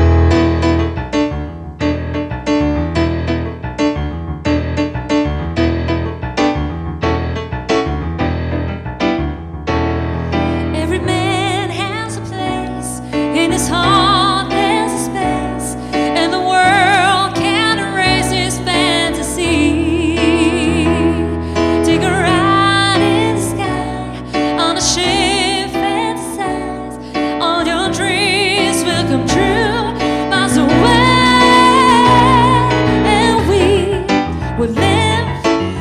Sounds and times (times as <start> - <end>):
Music: 0.0 - 35.8.